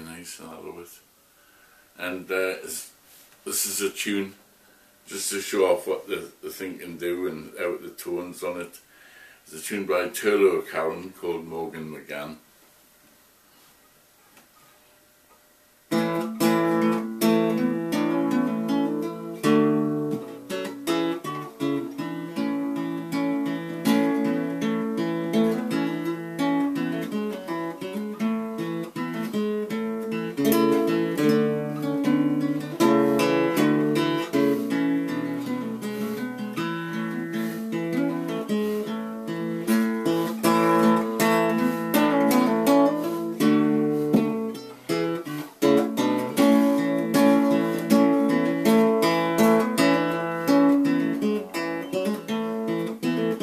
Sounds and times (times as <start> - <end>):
Speech: 0.0 - 1.1, 2.0 - 4.4, 5.1 - 8.8, 9.5 - 12.5.